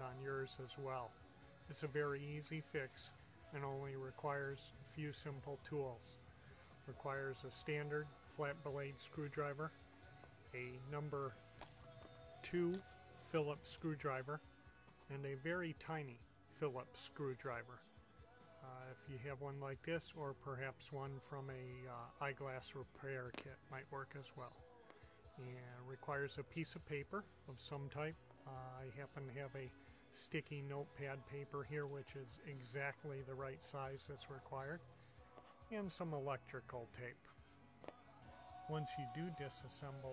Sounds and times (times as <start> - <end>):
Speech: 0.0 - 6.2, 6.8 - 9.8, 10.5 - 11.4, 12.4 - 14.4, 15.1 - 17.9, 18.6 - 24.6, 25.4 - 34.8, 35.7 - 37.4, 38.6 - 40.1.